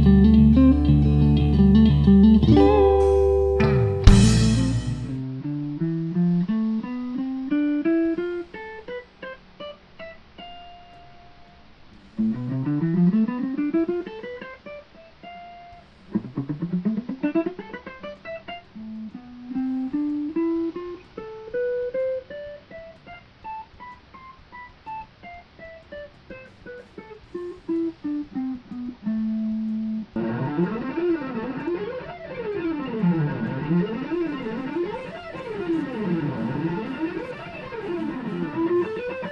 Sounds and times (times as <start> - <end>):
Electric guitar: 0.0 - 39.3.